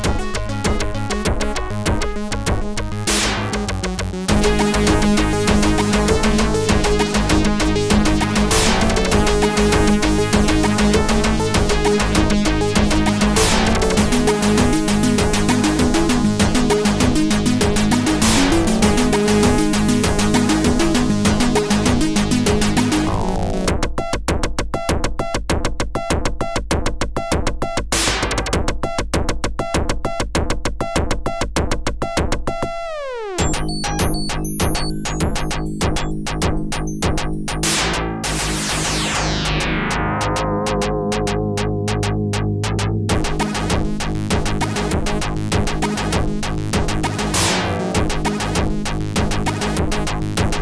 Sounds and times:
Soundtrack music: 0:00.0 - 0:23.8, 0:32.6 - 0:48.8
Theme music: 0:22.8 - 0:23.7, 0:33.0 - 0:43.7.

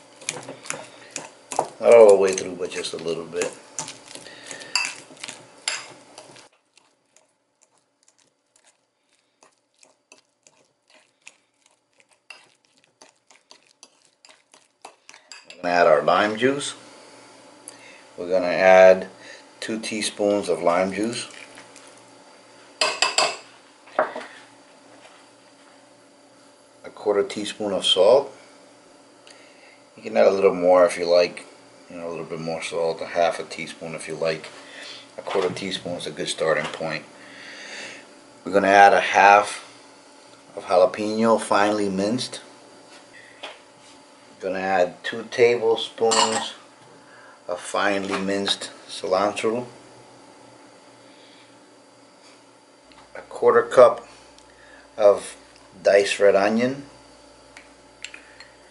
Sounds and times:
Speech: 0:01.8 - 0:03.6, 0:15.6 - 0:16.8, 0:18.2 - 0:21.3, 0:26.8 - 0:28.4, 0:30.0 - 0:34.5, 0:35.2 - 0:37.1, 0:38.5 - 0:39.6, 0:40.6 - 0:42.5, 0:44.4 - 0:46.6, 0:47.5 - 0:49.8, 0:53.2 - 0:54.1, 0:55.0 - 0:56.9.

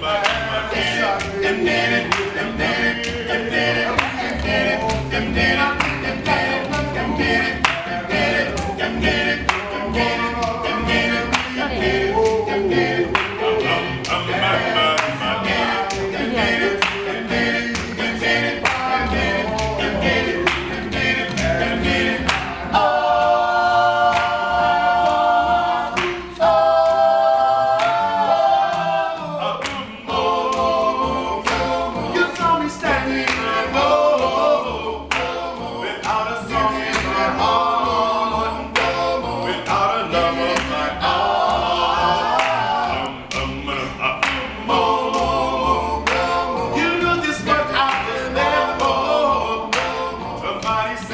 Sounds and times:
Music: 0:00.0 - 0:51.1.

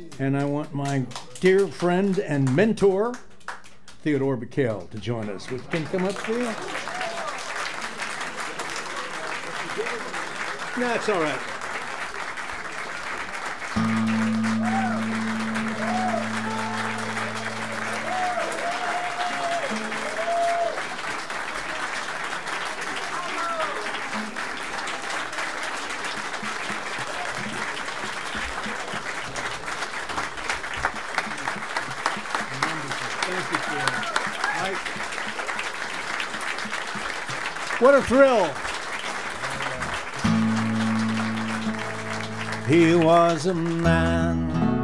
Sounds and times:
Applause: 0:00.0 - 0:44.3.

